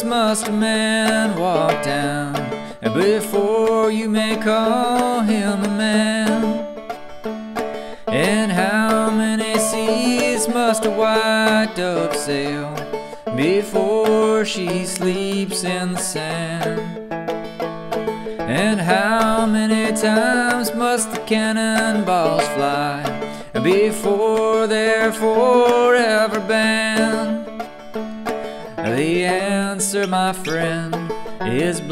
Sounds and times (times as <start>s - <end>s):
Music: 0.0s - 31.9s.